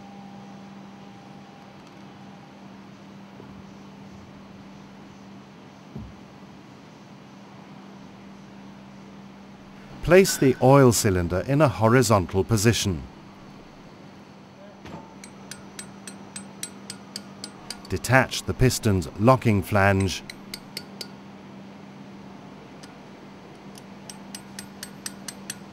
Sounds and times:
Speech: 10.0s - 13.1s, 17.9s - 20.2s.

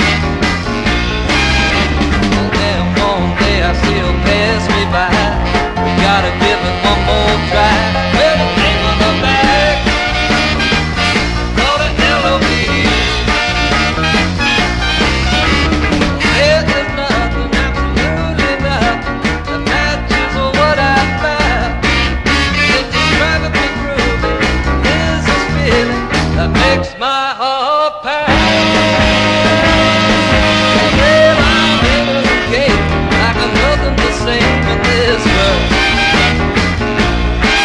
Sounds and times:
Soul music: 0.0s - 37.6s.

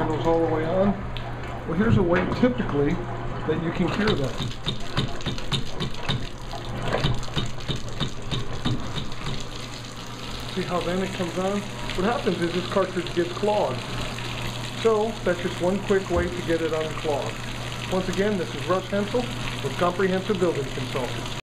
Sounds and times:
Speech: 0.0s - 1.0s, 1.7s - 4.4s, 10.5s - 13.8s, 14.8s - 21.2s.

